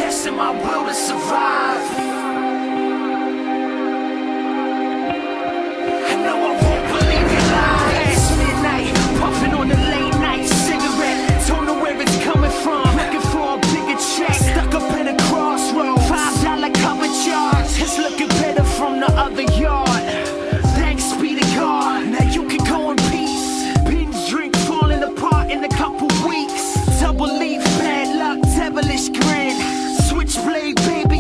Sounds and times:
Music: 0.0s - 31.2s.

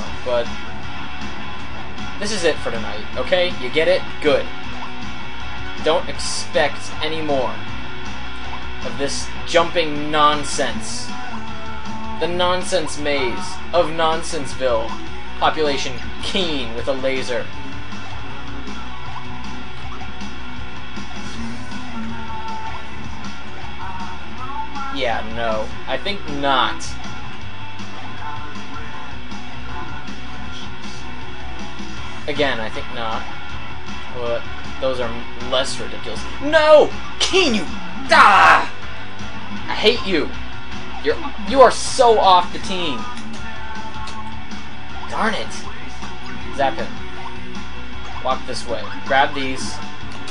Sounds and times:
Music: 0.0s - 50.3s
Speech: 2.2s - 4.5s, 5.8s - 7.6s, 8.8s - 11.1s, 12.2s - 17.5s, 25.0s - 27.0s, 32.3s - 33.2s, 34.2s - 38.7s, 39.7s - 40.3s, 41.0s - 43.1s, 45.1s - 45.7s, 46.6s - 46.9s, 48.3s - 50.3s.

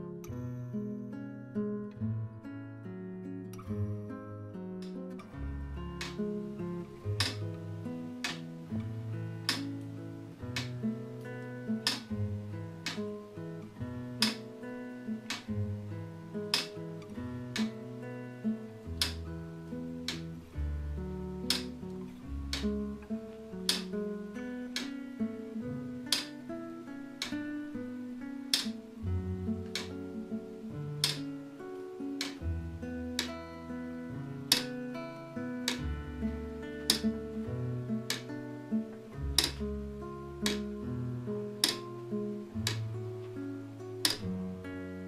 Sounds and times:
Music: 0.0s - 45.0s
Tick-tock: 7.2s - 7.6s, 8.2s - 14.5s, 15.1s - 17.8s, 18.8s - 19.3s, 20.0s - 20.6s, 21.4s - 25.0s, 26.0s - 26.5s, 28.4s - 28.9s, 29.6s - 30.1s, 31.0s - 31.5s, 32.2s - 32.5s, 33.1s - 33.5s, 34.4s - 34.9s, 36.6s - 39.8s, 40.4s - 40.8s, 41.5s - 43.4s, 44.0s - 44.4s.

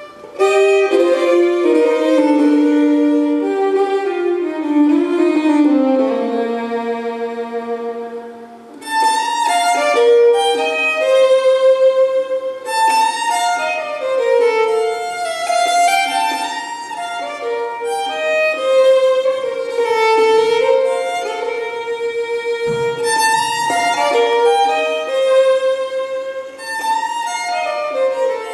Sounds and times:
Violin, fiddle: 0.0s - 28.5s.

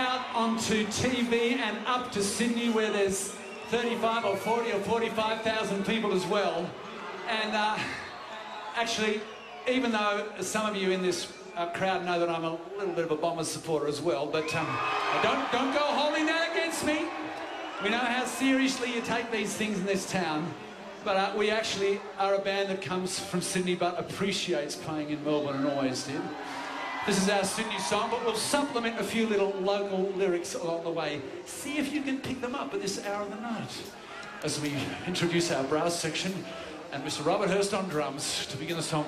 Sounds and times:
Speech: 0.0s - 8.0s, 8.8s - 17.1s, 17.8s - 26.3s, 27.0s - 39.0s.

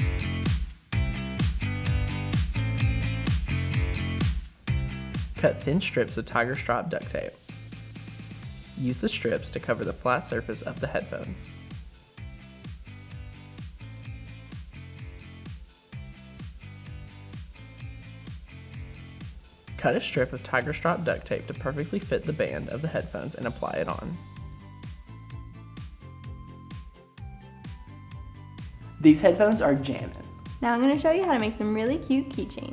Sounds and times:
Music: 0.0s - 32.7s
Speech: 5.4s - 7.4s, 8.8s - 11.5s, 19.8s - 24.2s, 29.0s - 32.7s.

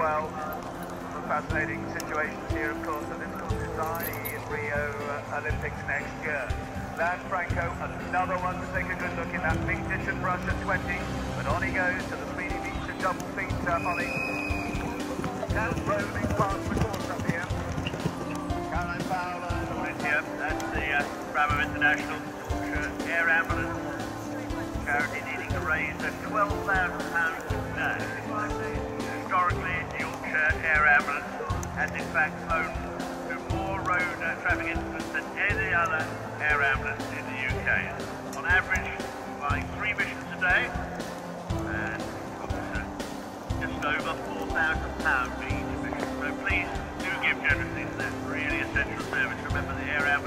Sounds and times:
Speech: 0.0s - 0.6s, 1.2s - 17.6s, 18.3s - 40.9s, 41.5s - 42.9s, 43.6s - 50.2s
Clip-clop: 0.0s - 50.2s
Country: 0.0s - 50.2s.

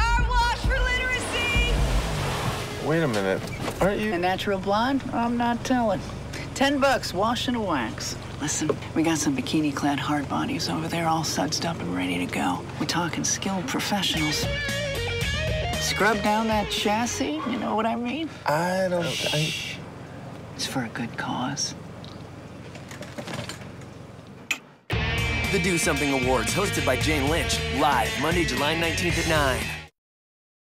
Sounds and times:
Music: 0.0s - 1.9s, 14.1s - 17.3s, 24.9s - 29.9s.

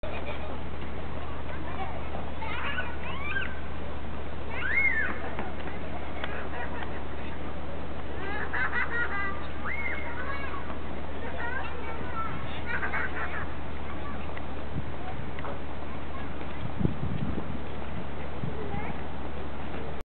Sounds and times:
Speech: 0.0s - 3.6s, 9.1s - 16.7s, 18.4s - 19.1s.

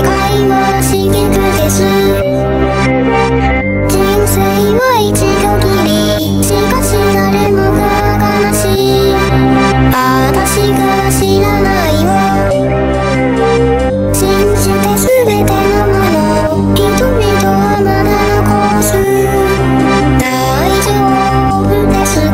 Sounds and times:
Music: 0.0s - 22.3s.

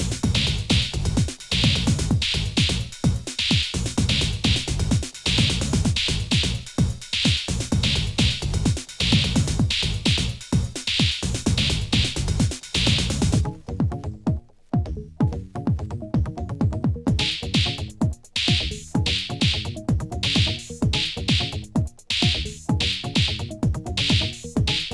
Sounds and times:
Techno: 0.0s - 24.9s.

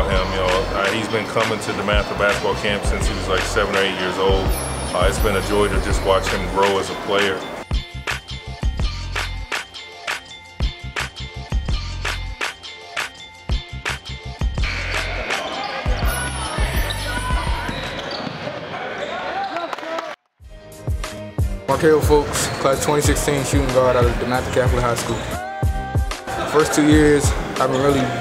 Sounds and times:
Inside, large room or hall: 0.0s - 7.6s, 14.6s - 20.2s, 21.7s - 28.2s
Music: 0.0s - 18.1s, 20.4s - 28.2s.

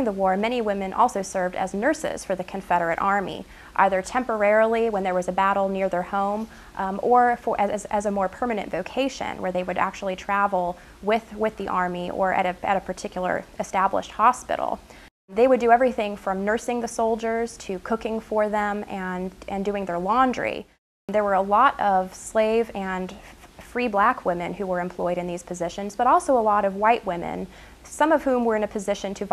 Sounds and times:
Female speech, woman speaking: 0.0s - 29.3s.

